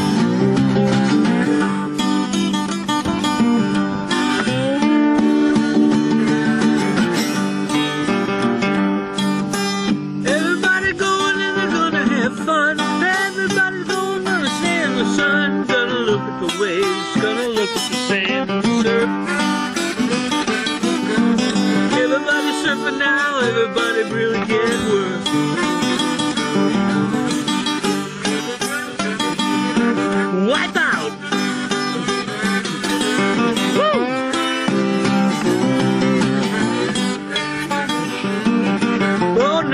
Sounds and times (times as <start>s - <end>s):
Acoustic guitar: 0.0s - 39.7s.